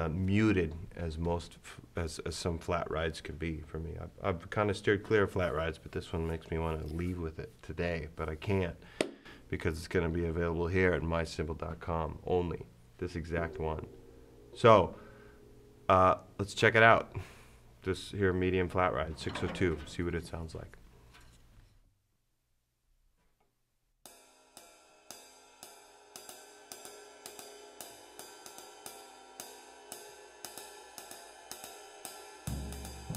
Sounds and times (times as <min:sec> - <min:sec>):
Speech: 0:00.0 - 0:08.8, 0:09.5 - 0:13.9, 0:14.6 - 0:15.0, 0:15.9 - 0:17.2, 0:17.8 - 0:20.8.